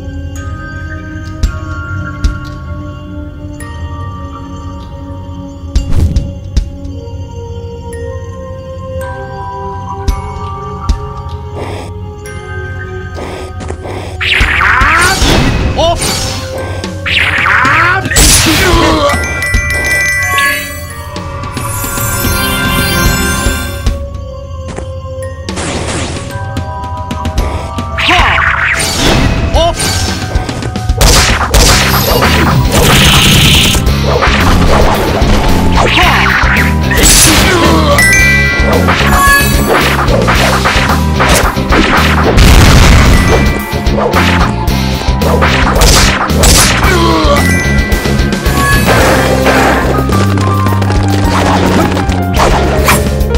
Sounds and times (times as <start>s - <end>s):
Music: 0.0s - 53.3s.